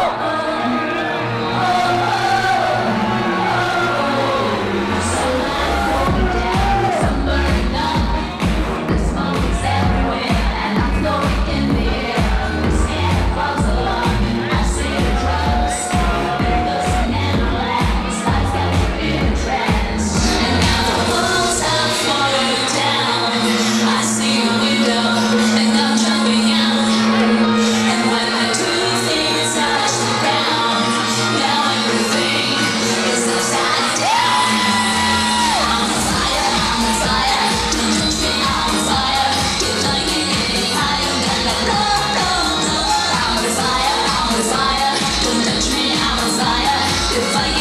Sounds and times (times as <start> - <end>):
Music: 0.0 - 47.6.